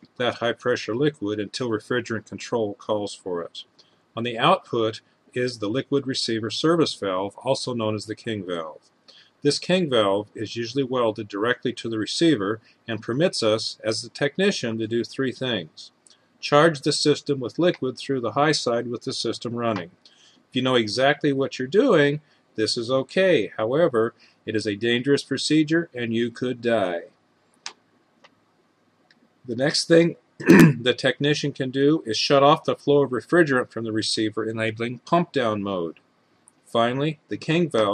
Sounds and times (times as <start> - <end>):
Speech: 0.0 - 8.8, 9.4 - 20.0, 20.6 - 27.1, 29.5 - 36.0, 36.7 - 37.9.